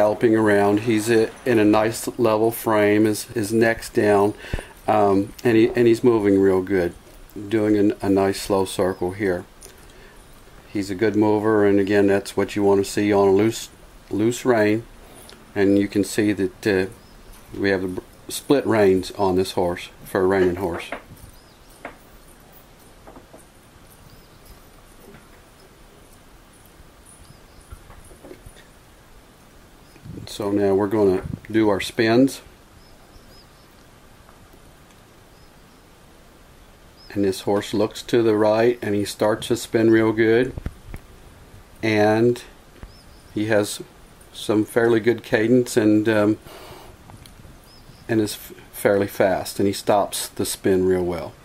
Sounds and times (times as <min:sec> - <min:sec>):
Speech: 0:00.0 - 0:09.5, 0:10.7 - 0:14.9, 0:15.6 - 0:17.0, 0:17.6 - 0:21.0, 0:30.1 - 0:32.5, 0:37.1 - 0:40.6, 0:41.8 - 0:42.6, 0:43.4 - 0:46.4, 0:48.1 - 0:51.4.